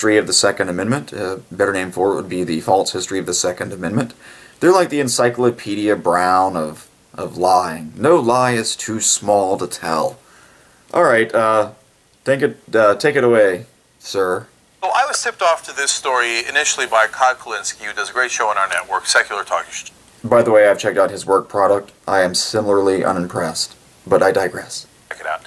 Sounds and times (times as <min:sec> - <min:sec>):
Speech: 0:00.0 - 0:10.2, 0:10.9 - 0:25.4.